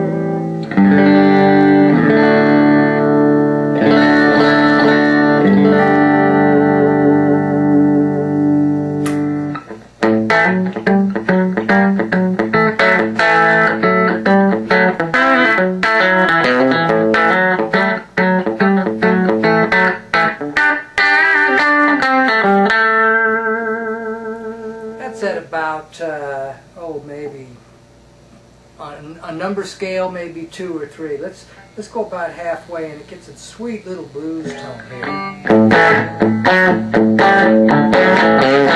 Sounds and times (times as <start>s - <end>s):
Electronic tuner: 0.0s - 25.4s, 34.3s - 38.7s
Guitar: 0.0s - 27.6s, 29.3s - 38.7s.